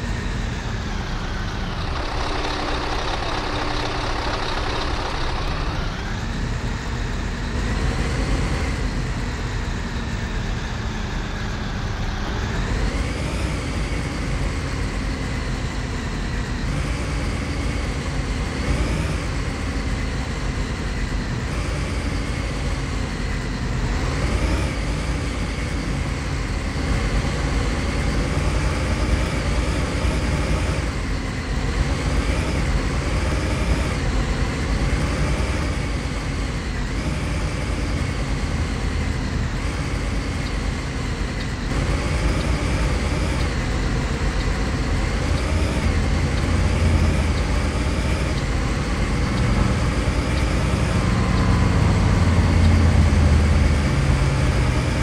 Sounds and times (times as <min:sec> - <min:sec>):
Bus: 0:00.0 - 0:55.0.